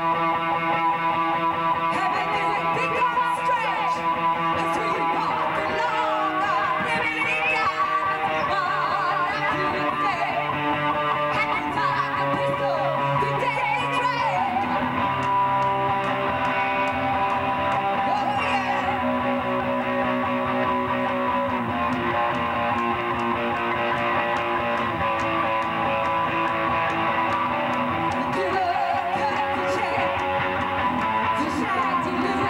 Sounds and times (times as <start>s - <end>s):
Music: 0.0s - 32.5s.